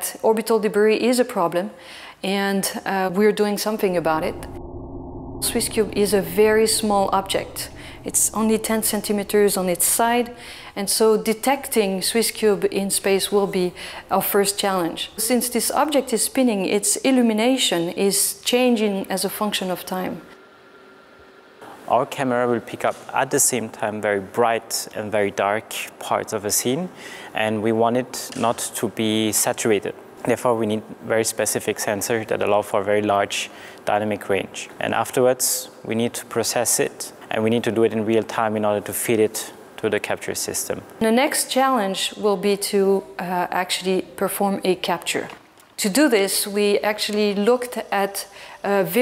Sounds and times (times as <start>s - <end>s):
Speech: 5.4s - 20.2s, 21.9s - 49.0s.